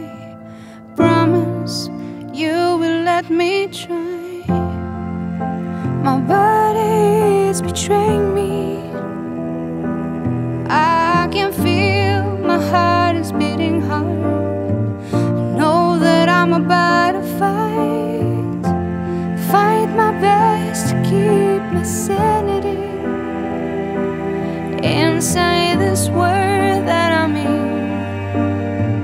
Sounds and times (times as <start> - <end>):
Music: 0.0 - 29.0.